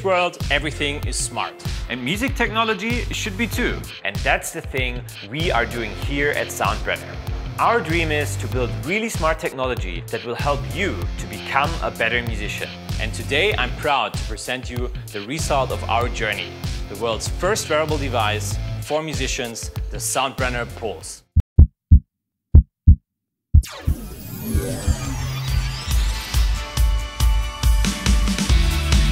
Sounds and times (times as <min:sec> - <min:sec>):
Music: 0:00.0 - 0:21.2, 0:23.7 - 0:29.1
Speech: 0:00.0 - 0:21.2.